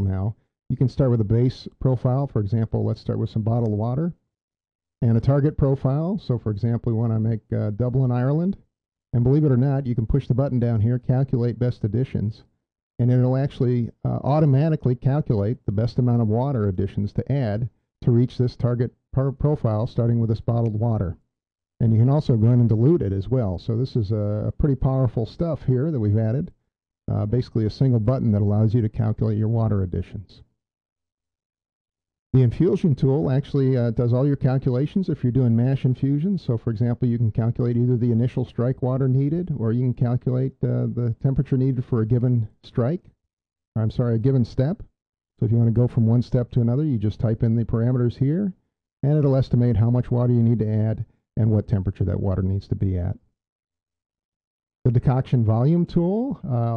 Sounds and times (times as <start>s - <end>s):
Speech: 0.0s - 4.2s, 5.0s - 21.2s, 21.8s - 30.5s, 32.4s - 43.2s, 43.8s - 53.3s, 54.9s - 56.7s.